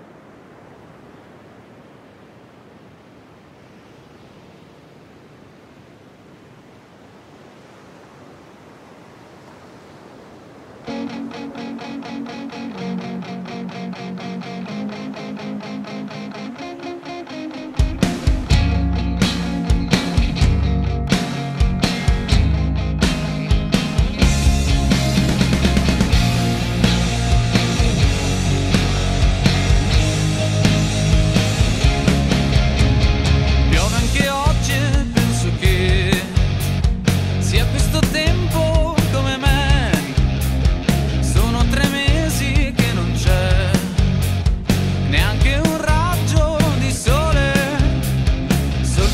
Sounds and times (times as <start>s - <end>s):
Music: 10.9s - 49.1s.